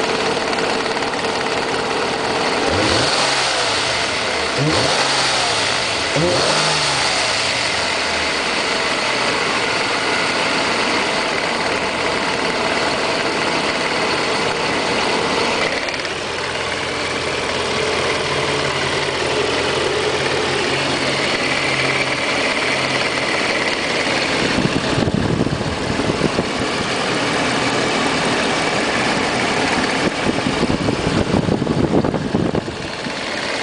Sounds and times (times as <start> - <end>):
Engine knocking: 0.0 - 33.6.